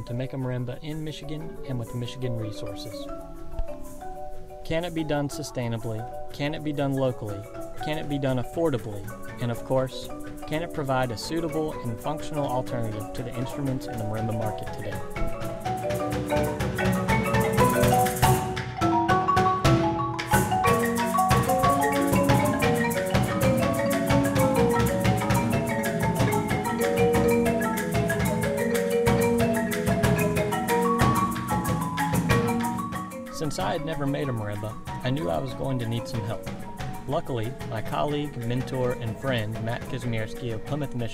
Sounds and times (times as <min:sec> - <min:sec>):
Speech: 0:00.0 - 0:03.1, 0:04.6 - 0:15.0, 0:33.4 - 0:36.4, 0:37.1 - 0:41.1
Marimba, xylophone: 0:00.0 - 0:41.1.